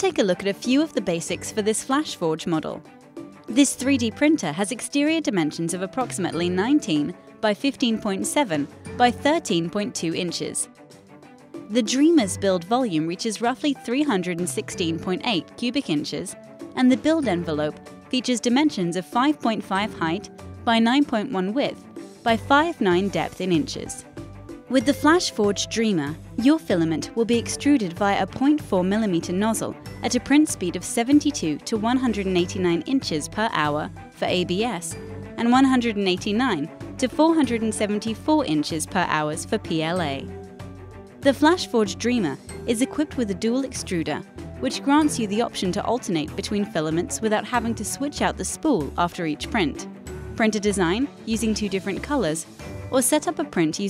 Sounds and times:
Speech: 0:00.0 - 0:02.8, 0:03.5 - 0:10.7, 0:11.7 - 0:24.0, 0:24.7 - 0:40.3, 0:41.3 - 0:53.9
Music: 0:00.0 - 0:53.9.

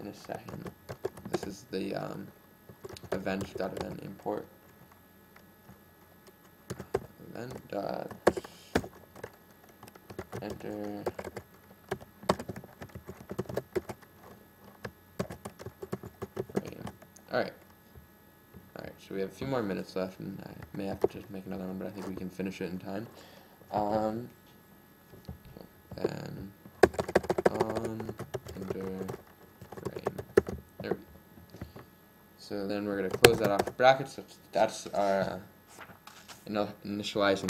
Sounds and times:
Speech: 0:00.0 - 0:00.7, 0:01.3 - 0:02.4, 0:03.0 - 0:04.5, 0:07.2 - 0:08.2, 0:10.4 - 0:11.2, 0:16.6 - 0:17.6, 0:18.8 - 0:23.1, 0:23.7 - 0:24.4, 0:25.5 - 0:26.6, 0:27.4 - 0:29.2, 0:29.9 - 0:30.2, 0:30.8 - 0:31.1, 0:32.4 - 0:35.5, 0:36.4 - 0:37.4
Typing: 0:00.1 - 0:01.5, 0:02.8 - 0:04.2, 0:06.2 - 0:17.1, 0:26.8 - 0:30.6, 0:33.0 - 0:33.8.

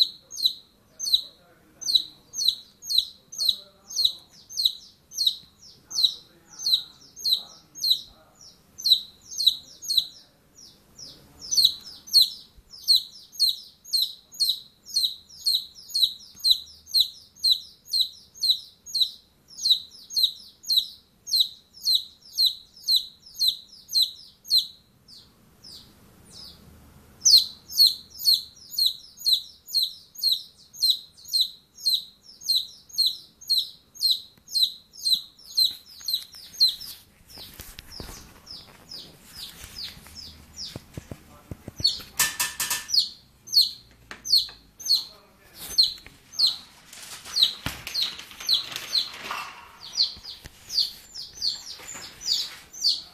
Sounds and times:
Chirp, tweet: 0:00.0 - 0:40.8, 0:41.7 - 0:42.1, 0:42.9 - 0:46.6, 0:47.3 - 0:53.1.

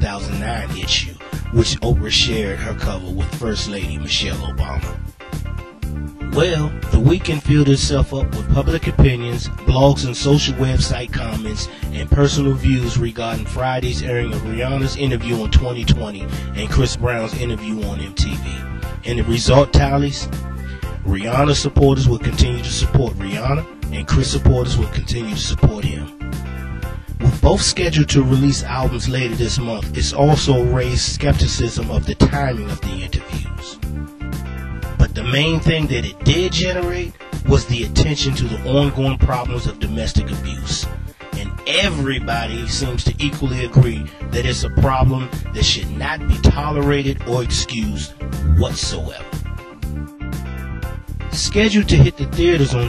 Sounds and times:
Speech: 0:00.0 - 0:05.0, 0:06.3 - 0:20.3, 0:21.0 - 0:26.1, 0:27.2 - 0:33.8, 0:35.0 - 0:49.4, 0:51.4 - 0:52.8
Music: 0:00.0 - 0:52.8.

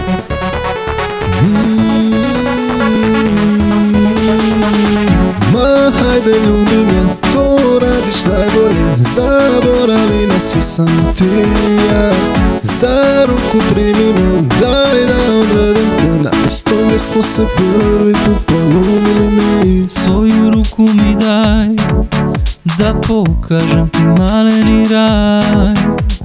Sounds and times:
Rhythm and blues: 0:00.0 - 0:26.2.

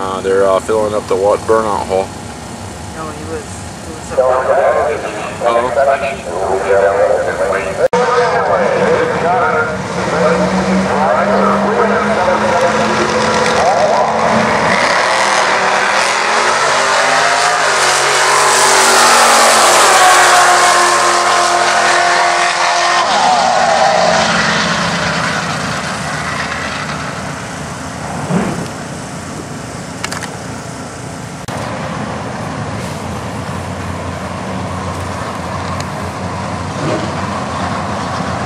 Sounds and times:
Car: 0:00.0 - 0:38.4
Outside, rural or natural: 0:00.0 - 0:38.4
Traffic noise, roadway noise: 0:00.0 - 0:38.4.

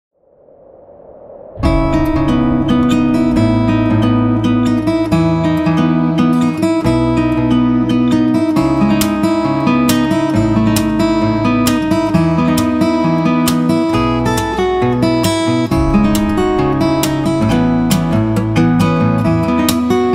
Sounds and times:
Guitar: 0:01.6 - 0:20.1.

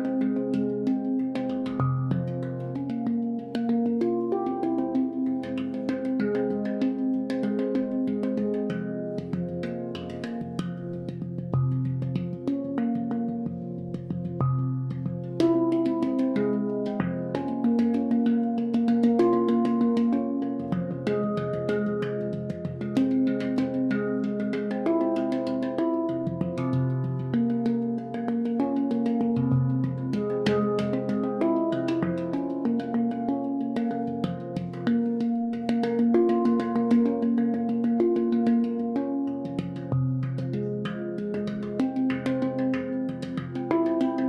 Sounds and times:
Music: 0:00.0 - 0:44.2.

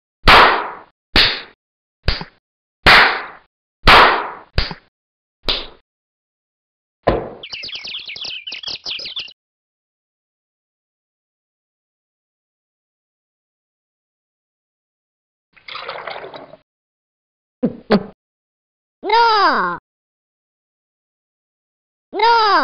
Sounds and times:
Chirp, tweet: 0:07.4 - 0:09.4.

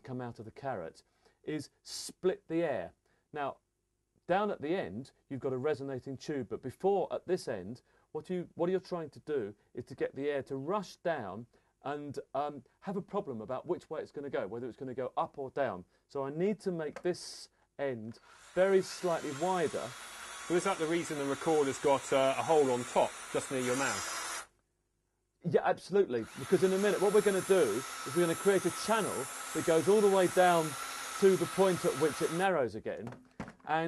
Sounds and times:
Speech: 0:00.0 - 0:03.6, 0:04.3 - 0:24.1, 0:25.4 - 0:33.8.

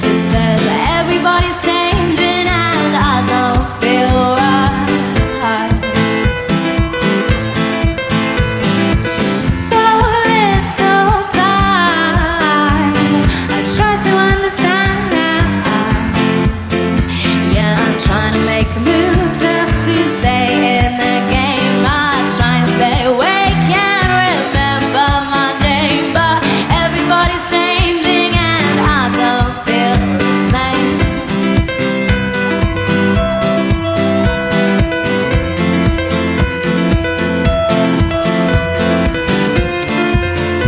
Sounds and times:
Pop music: 0:00.0 - 0:40.6.

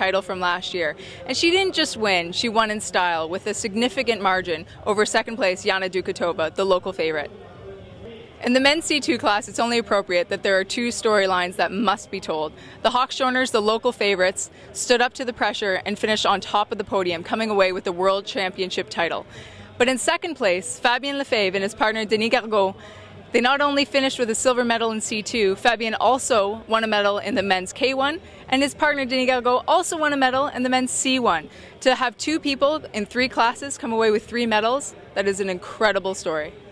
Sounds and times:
Speech: 0:00.0 - 0:36.7.

